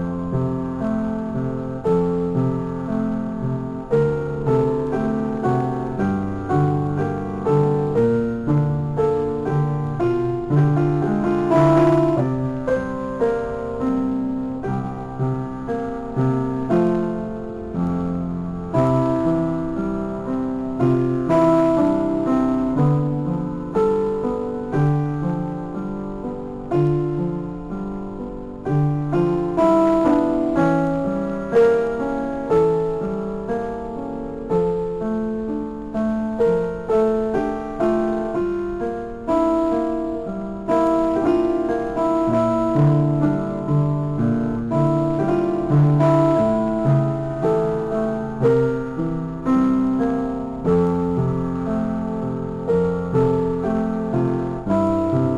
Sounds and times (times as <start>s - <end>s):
Music: 0.0s - 55.3s.